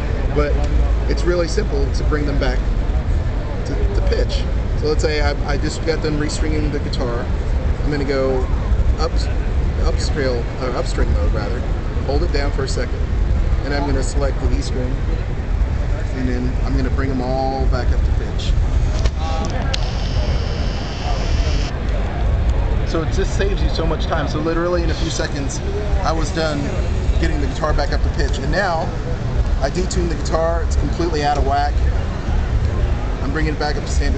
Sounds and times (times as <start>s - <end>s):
Speech: 0.0s - 2.7s, 3.4s - 15.1s, 16.0s - 19.8s, 22.9s - 29.0s, 29.6s - 32.0s, 33.2s - 34.1s.